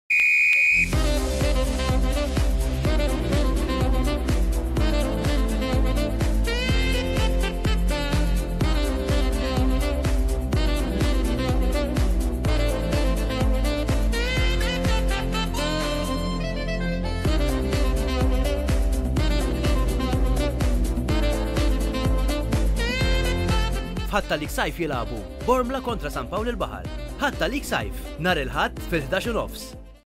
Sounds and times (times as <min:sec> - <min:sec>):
Music: 0:00.9 - 0:30.1
Speech: 0:24.1 - 0:29.8.